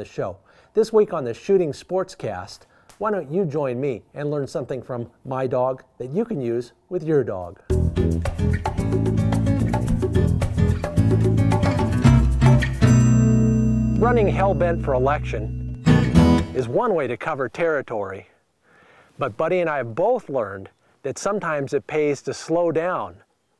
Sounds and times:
Speech: 0.0s - 7.6s, 14.0s - 15.6s, 16.6s - 18.4s, 19.2s - 23.2s
Music: 7.7s - 16.6s.

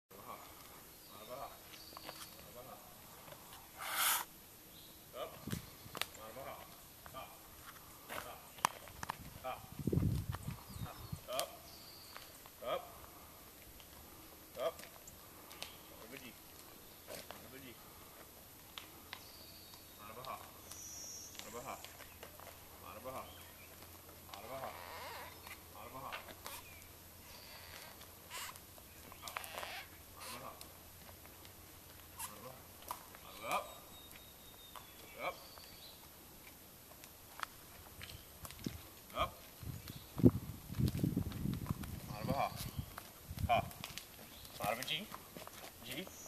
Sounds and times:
Speech: 1.1s - 1.6s, 2.4s - 2.9s, 6.1s - 7.4s, 16.0s - 16.4s, 17.1s - 17.8s, 20.0s - 20.5s, 21.4s - 21.9s, 22.8s - 23.4s, 24.3s - 24.8s, 25.7s - 26.3s, 33.2s - 33.8s, 35.0s - 35.4s, 39.1s - 39.4s, 42.1s - 42.6s, 44.6s - 45.2s, 45.8s - 46.2s.

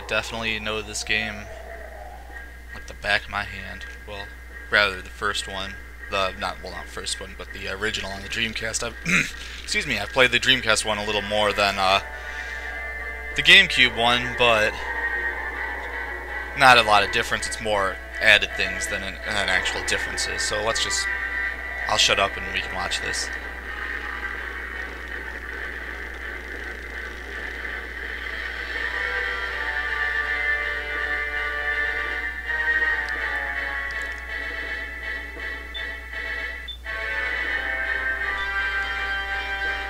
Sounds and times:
Speech: 0.0s - 1.5s, 2.8s - 12.0s, 13.4s - 14.8s, 16.6s - 21.1s, 21.9s - 23.4s.

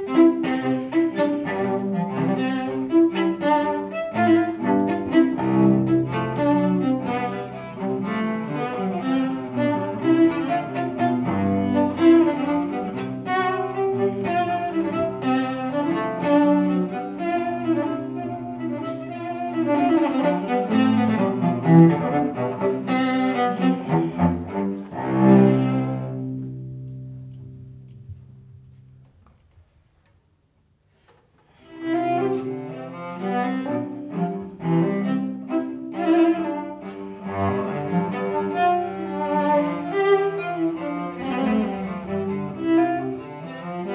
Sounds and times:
Cello: 0.0s - 29.7s, 30.9s - 43.9s.

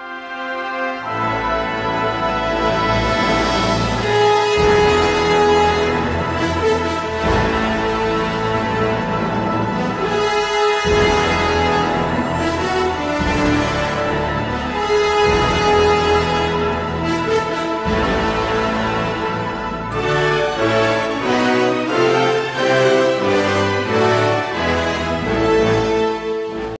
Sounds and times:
Independent music: 0.0s - 26.7s.

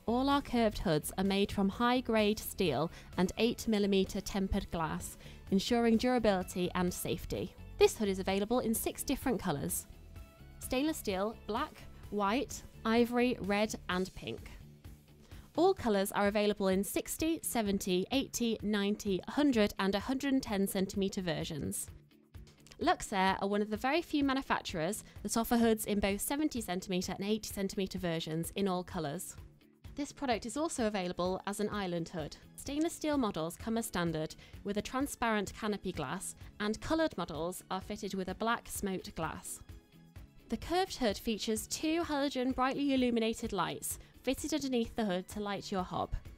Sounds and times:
Speech: 0.0s - 9.8s, 10.6s - 14.6s, 15.6s - 21.9s, 22.7s - 29.4s, 30.0s - 39.6s, 40.5s - 46.2s
Music: 0.0s - 46.3s.

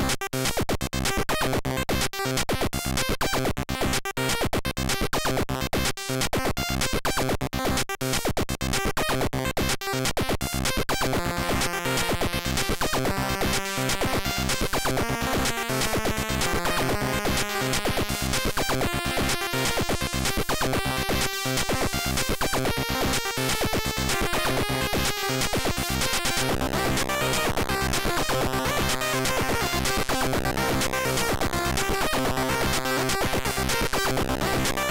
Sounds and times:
Music: 0.0s - 34.9s.

